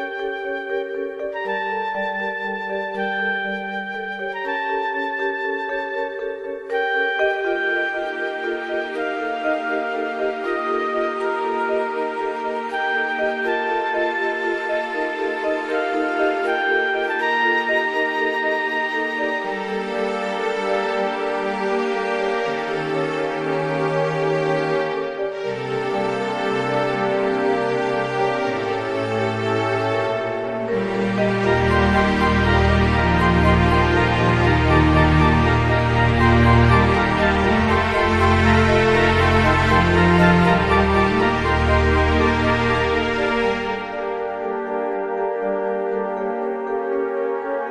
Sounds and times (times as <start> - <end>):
Music: 0.0 - 47.7.